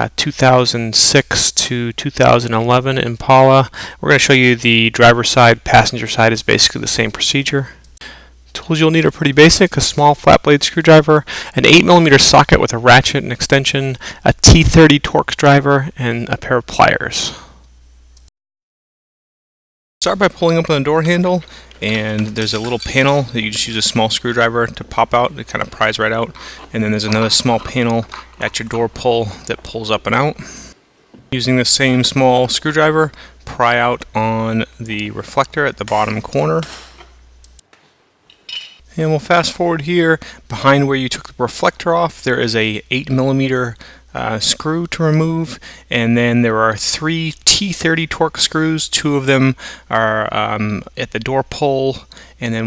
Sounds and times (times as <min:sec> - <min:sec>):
Speech: 0:00.0 - 0:07.8, 0:08.5 - 0:17.5, 0:20.0 - 0:30.4, 0:31.4 - 0:36.7, 0:38.9 - 0:52.6.